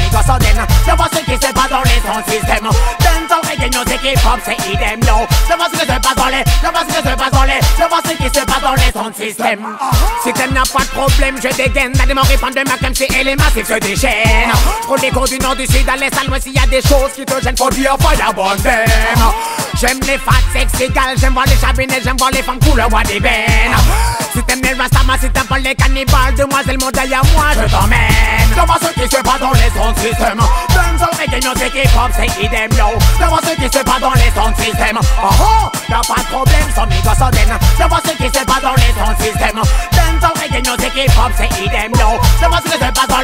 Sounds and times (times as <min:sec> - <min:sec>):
Music: 0:00.0 - 0:43.2.